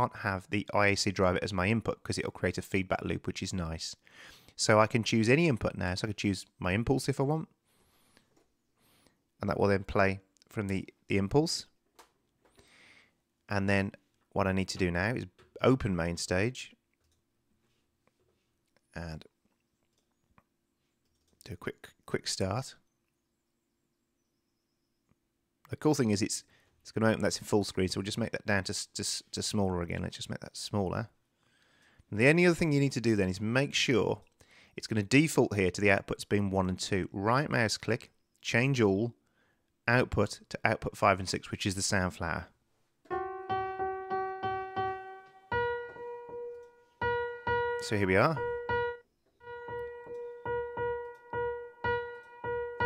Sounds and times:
Speech: 0.0s - 4.0s, 4.6s - 7.5s, 9.4s - 11.8s, 13.5s - 16.8s, 18.9s - 19.3s, 21.4s - 22.8s, 25.7s - 31.2s, 32.1s - 34.2s, 34.8s - 39.2s, 39.9s - 42.6s, 47.8s - 48.4s.

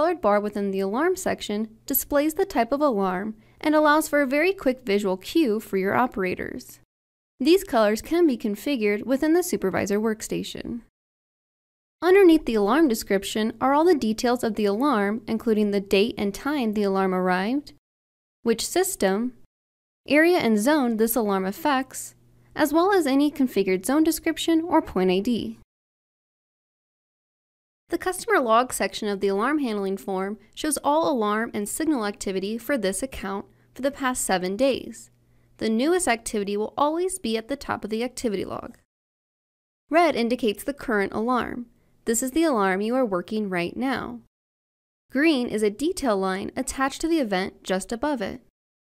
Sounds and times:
Speech: 0.0s - 10.9s, 12.0s - 17.8s, 18.5s - 19.5s, 20.1s - 25.6s, 27.9s - 38.9s, 39.9s - 44.3s, 45.2s - 48.5s.

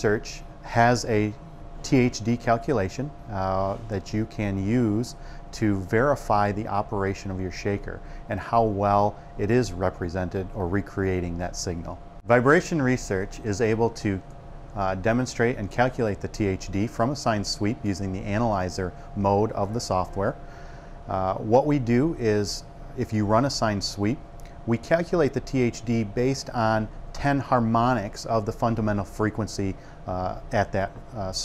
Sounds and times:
Speech: 0.0s - 14.2s, 14.8s - 20.4s, 21.1s - 31.4s.

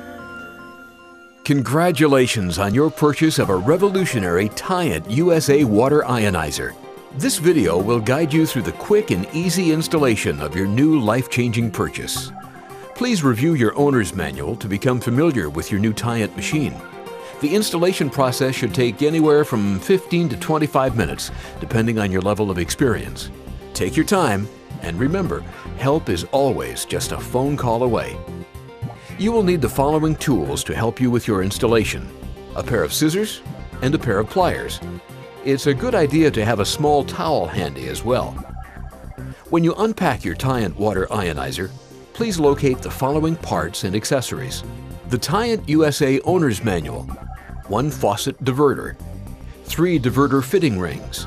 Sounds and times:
Music: 0.0s - 51.2s
Speech: 1.5s - 12.3s, 13.0s - 16.8s, 17.4s - 28.2s, 29.1s - 34.8s, 35.4s - 38.4s, 39.5s - 47.1s, 47.7s - 49.0s, 49.7s - 51.2s.

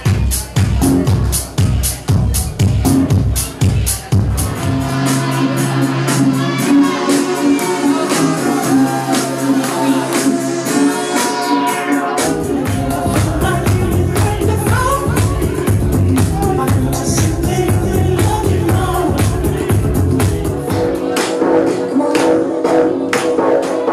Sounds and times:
Disco: 0.0s - 23.9s
Rhythm and blues: 0.0s - 23.9s.

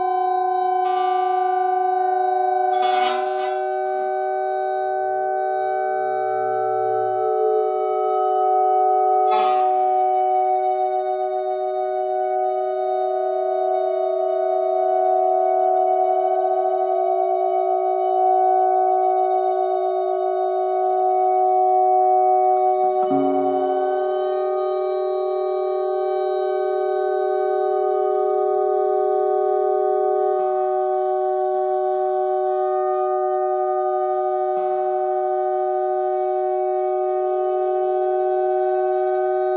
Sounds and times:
Sine wave: 0.0s - 39.5s.

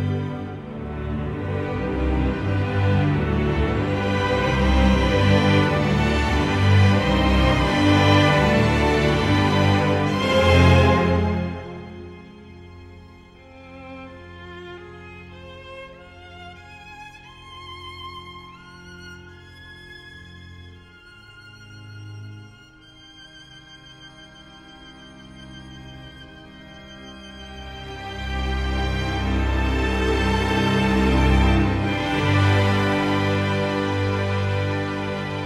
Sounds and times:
Cello: 0.0s - 35.4s.

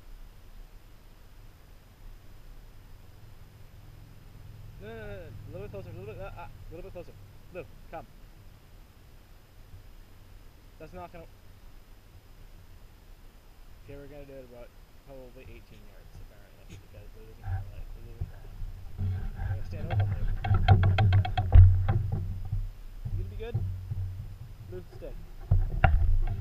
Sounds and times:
Speech: 4.8s - 8.1s, 10.8s - 11.3s, 13.8s - 20.4s, 23.1s - 23.6s, 24.7s - 25.2s.

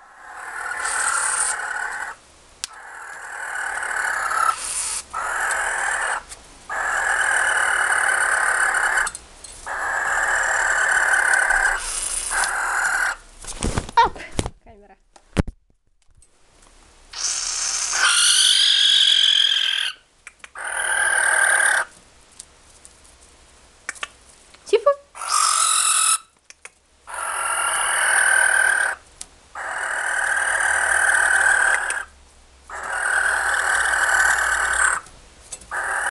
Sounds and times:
Owl: 0.0s - 13.2s, 17.1s - 21.9s, 25.2s - 26.3s, 27.1s - 29.0s, 29.6s - 35.1s, 35.7s - 36.1s.

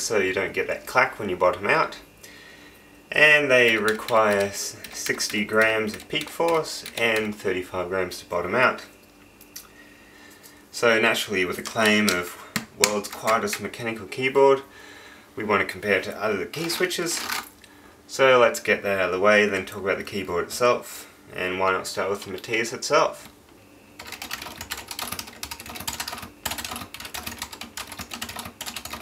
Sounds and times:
Speech: 0.0s - 2.1s, 3.1s - 9.0s, 10.7s - 14.7s, 15.4s - 17.3s, 18.1s - 23.3s
Computer keyboard: 3.6s - 7.4s, 11.6s - 13.7s, 24.0s - 29.0s.

